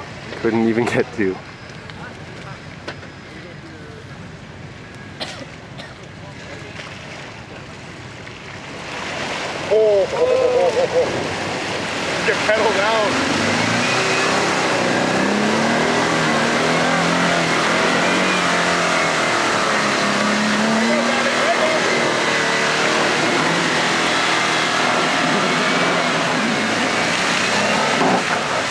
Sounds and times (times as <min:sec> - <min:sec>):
Vehicle: 0:00.0 - 0:28.7.